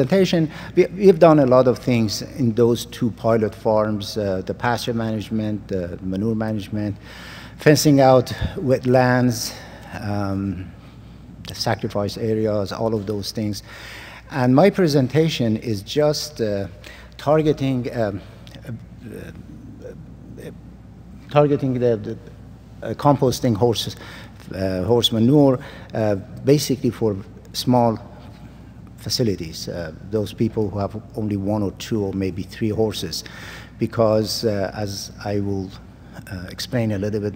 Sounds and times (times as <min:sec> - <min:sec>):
Speech: 0:00.0 - 0:07.0, 0:07.6 - 0:10.7, 0:11.4 - 0:13.7, 0:14.3 - 0:20.6, 0:21.2 - 0:28.2, 0:29.0 - 0:37.3.